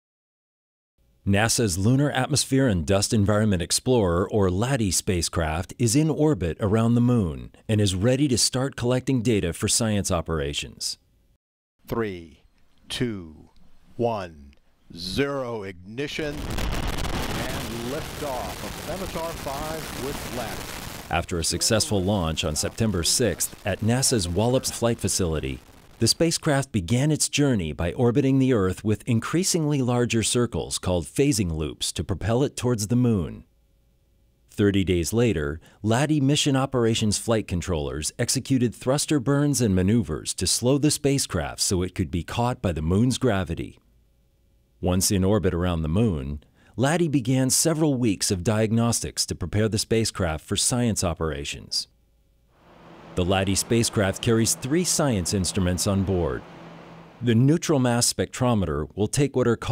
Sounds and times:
Speech: 0:01.3 - 0:11.0, 0:11.9 - 0:16.4, 0:17.3 - 0:33.5, 0:34.5 - 0:43.8, 0:44.8 - 0:51.9, 0:53.2 - 0:56.4, 0:57.2 - 0:59.7.

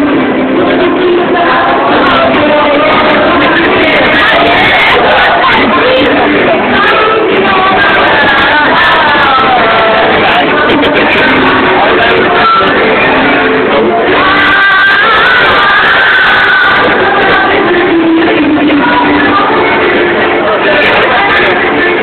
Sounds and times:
Female singing: 0:00.0 - 0:22.0
Music: 0:00.0 - 0:22.0.

